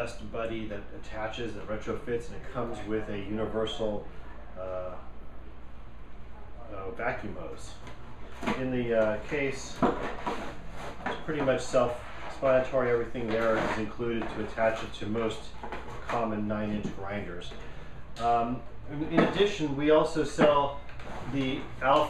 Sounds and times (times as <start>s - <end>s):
Speech: 0.0s - 5.1s, 6.6s - 10.0s, 11.1s - 17.6s, 18.2s - 22.0s.